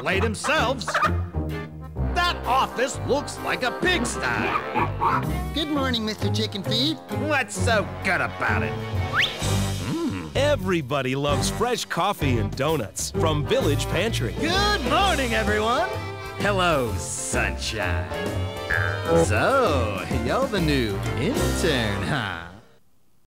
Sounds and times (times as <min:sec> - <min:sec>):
Speech: 0:00.0 - 0:00.9, 0:05.6 - 0:08.7, 0:10.4 - 0:18.1, 0:19.1 - 0:22.6
Music: 0:00.0 - 0:22.8.